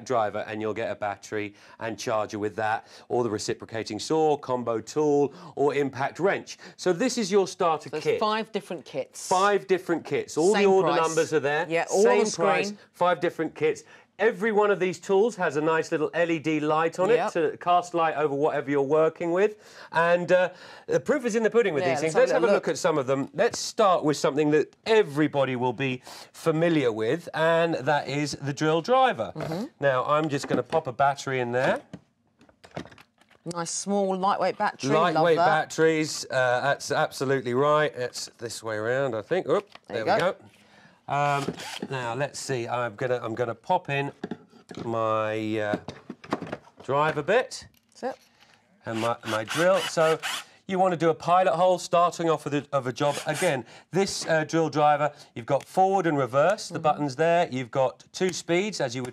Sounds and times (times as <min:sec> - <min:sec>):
Speech: 0:09.3 - 0:19.0, 0:21.1 - 0:26.0, 0:34.4 - 0:40.4, 0:48.9 - 0:59.1.